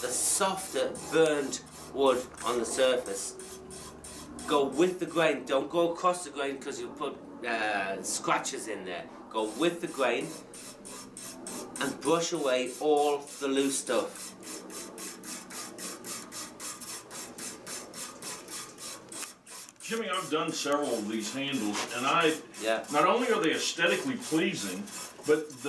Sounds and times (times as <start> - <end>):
Speech: 0.0 - 3.3, 4.5 - 10.3, 11.8 - 14.1, 19.9 - 25.6.